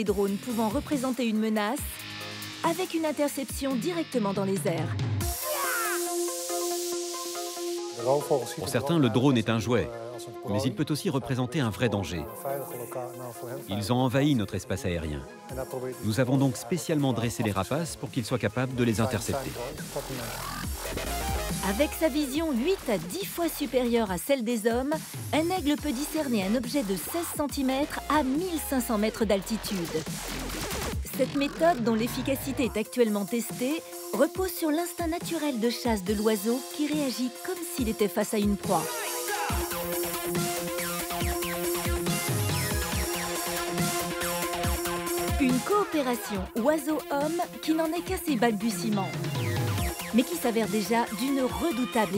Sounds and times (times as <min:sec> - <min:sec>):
Speech: 0:00.0 - 0:01.9, 0:02.6 - 0:05.7, 0:08.0 - 0:20.5, 0:21.6 - 0:30.0, 0:31.0 - 0:39.0, 0:45.4 - 0:49.2, 0:50.1 - 0:52.1
Music: 0:00.0 - 0:52.1.